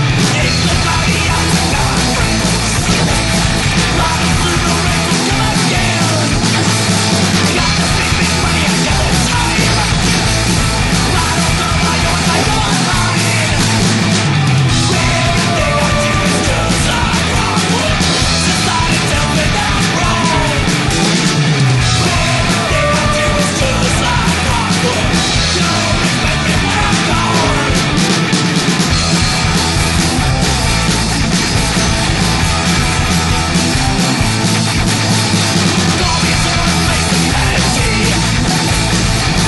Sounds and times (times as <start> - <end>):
Music: 0.0 - 39.4.